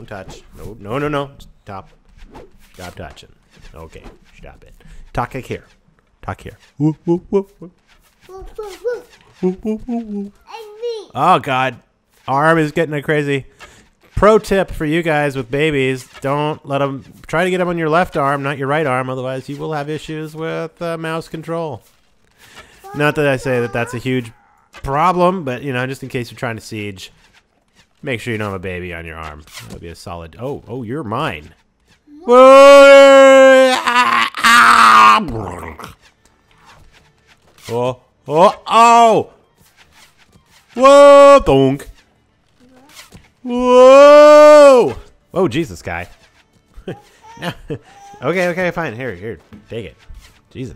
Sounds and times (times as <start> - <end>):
Groan: 32.1 - 35.9.